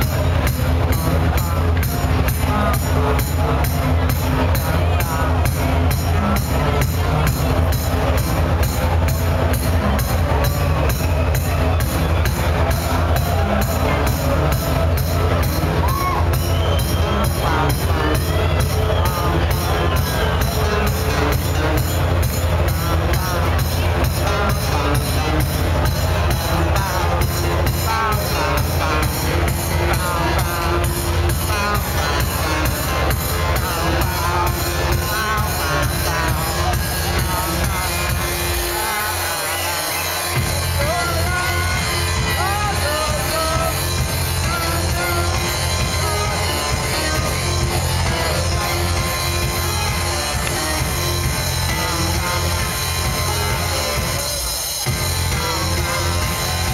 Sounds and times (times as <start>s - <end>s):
Speech: 0.0s - 56.7s
Techno: 0.0s - 56.7s.